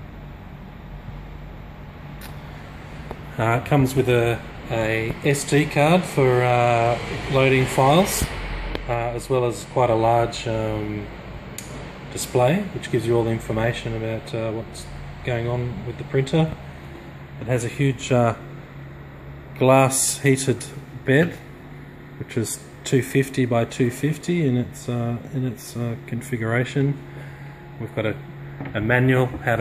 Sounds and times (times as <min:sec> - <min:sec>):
Speech: 0:03.3 - 0:08.3, 0:08.9 - 0:11.1, 0:12.1 - 0:16.6, 0:17.4 - 0:18.4, 0:19.6 - 0:21.4, 0:22.2 - 0:27.0, 0:27.8 - 0:29.6.